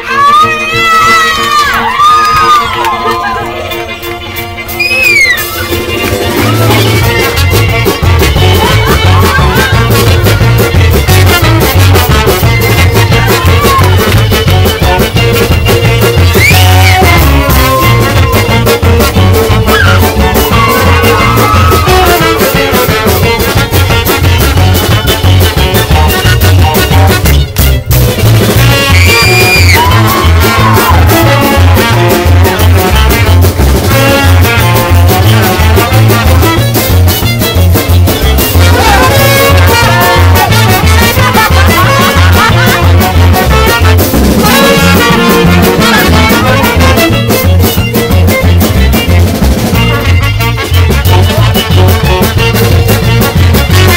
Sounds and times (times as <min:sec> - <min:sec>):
Music: 0:00.0 - 0:53.9.